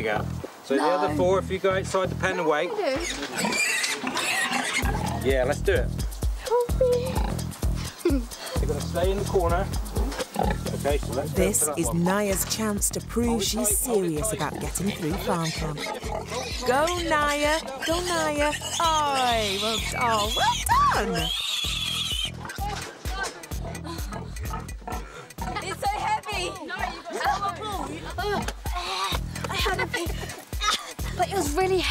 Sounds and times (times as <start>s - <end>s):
Music: 0.0s - 2.7s, 4.8s - 31.9s
Oink: 2.9s - 5.4s, 7.0s - 7.4s, 10.1s - 10.9s, 14.5s - 22.8s, 24.1s - 25.7s.